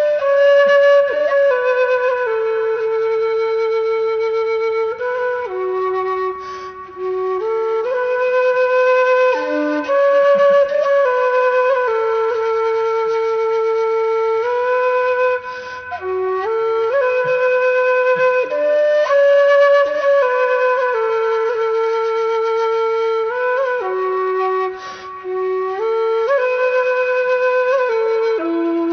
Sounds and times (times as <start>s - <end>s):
Flute: 0.0s - 28.9s.